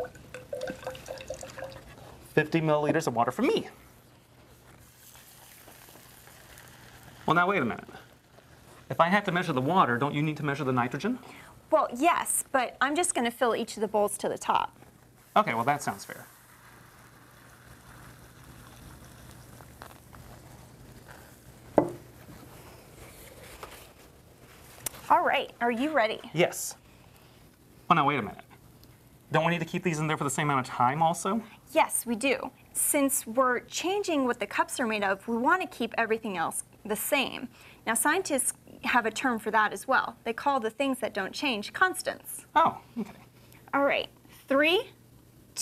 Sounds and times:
Liquid: 0:00.0 - 0:02.3, 0:04.8 - 0:08.7, 0:15.8 - 0:22.0.

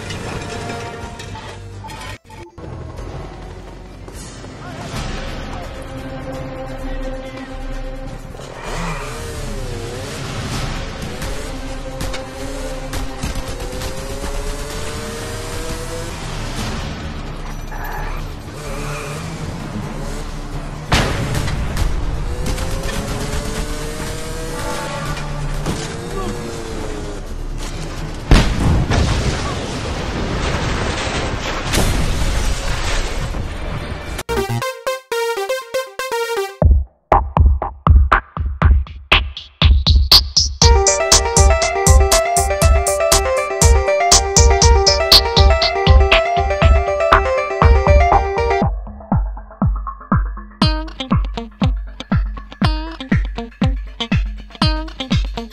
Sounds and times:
Music: 0:00.0 - 0:14.2, 0:34.3 - 0:55.5
Motorcycle: 0:07.6 - 0:28.4
Explosion: 0:28.3 - 0:34.2.

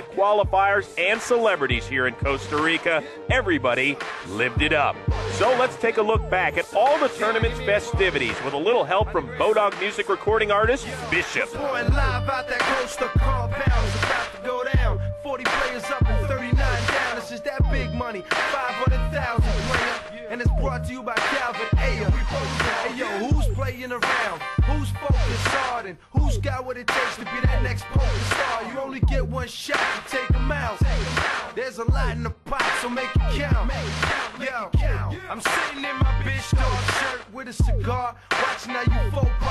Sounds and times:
Music: 0:00.0 - 0:39.5.

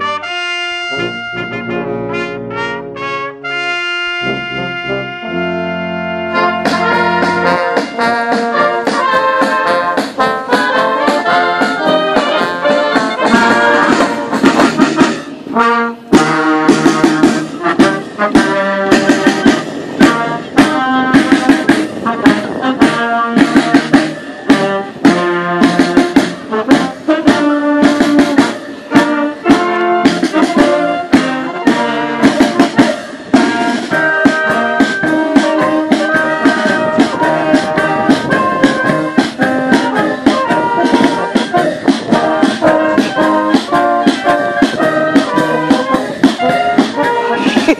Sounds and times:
Music: 0:00.0 - 0:47.7.

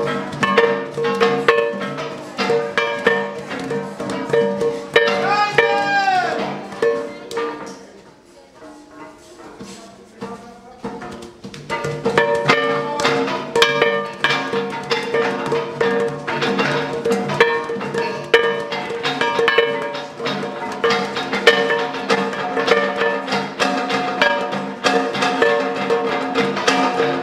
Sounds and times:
Speech: 0:05.1 - 0:11.2.

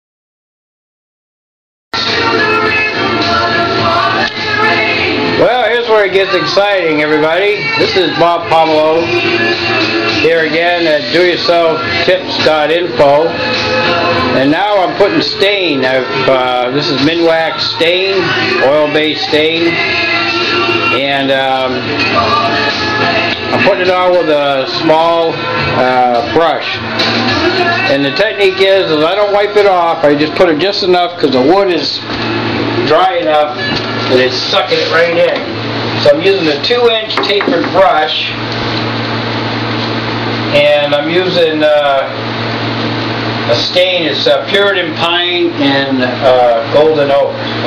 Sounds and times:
Speech: 0:05.4 - 0:09.1, 0:10.2 - 0:13.4, 0:14.4 - 0:19.8, 0:21.0 - 0:21.8, 0:23.5 - 0:26.8, 0:27.9 - 0:32.0, 0:32.8 - 0:38.4, 0:40.5 - 0:42.2, 0:43.5 - 0:47.6.

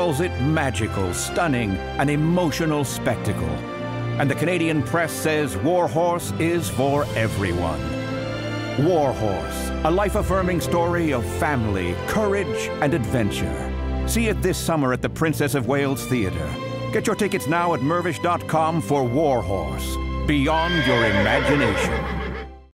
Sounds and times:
Speech: 0:00.0 - 0:03.6, 0:04.2 - 0:08.0, 0:08.8 - 0:22.1
Music: 0:00.0 - 0:22.7
Neigh, whinny: 0:20.5 - 0:22.6.

